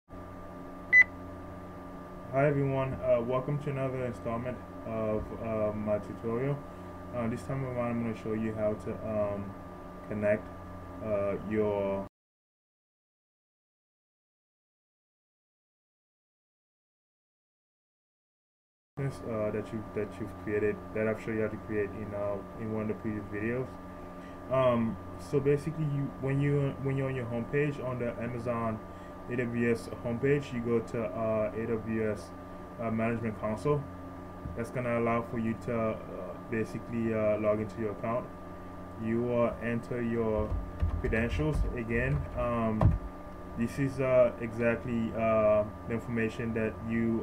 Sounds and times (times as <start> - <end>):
Speech: 2.3 - 12.1, 19.0 - 23.8, 24.5 - 33.9, 34.5 - 38.3, 39.0 - 42.9, 43.6 - 47.2.